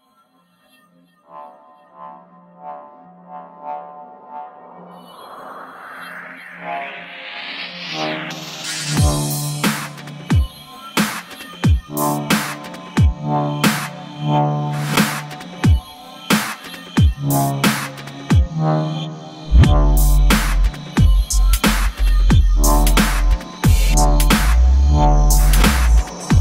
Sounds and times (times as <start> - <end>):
Drum and bass: 5.0 - 26.4.